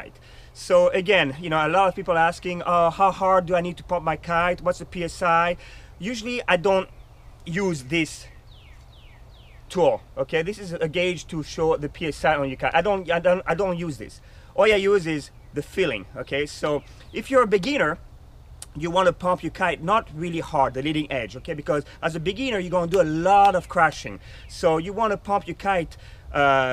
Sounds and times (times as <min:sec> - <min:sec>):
Speech: 0:00.0 - 0:06.9, 0:07.5 - 0:08.3, 0:09.7 - 0:18.0, 0:18.6 - 0:26.7.